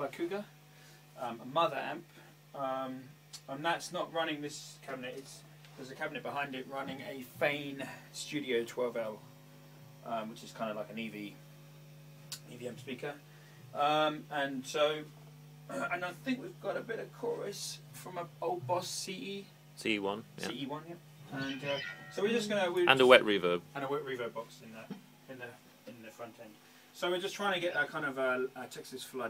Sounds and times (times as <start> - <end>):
Speech: 0.0 - 0.5, 1.2 - 9.2, 10.0 - 11.4, 12.4 - 13.2, 13.8 - 15.1, 15.7 - 29.3.